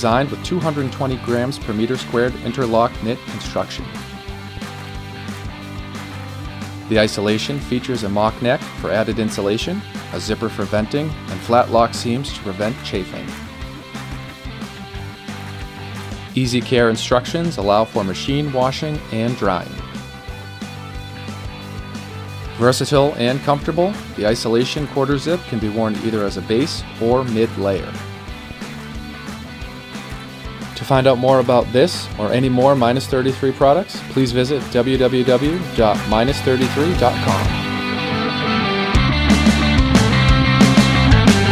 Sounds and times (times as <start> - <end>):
Speech: 0.0 - 3.9, 6.9 - 13.4, 16.4 - 19.8, 22.6 - 28.0, 30.8 - 37.7
Music: 0.0 - 41.5.